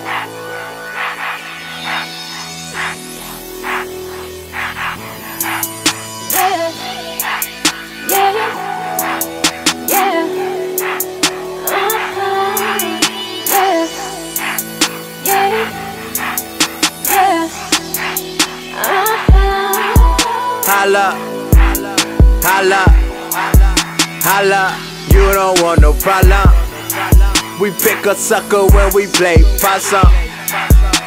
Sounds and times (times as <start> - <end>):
Rhythm and blues: 0.0 - 31.0.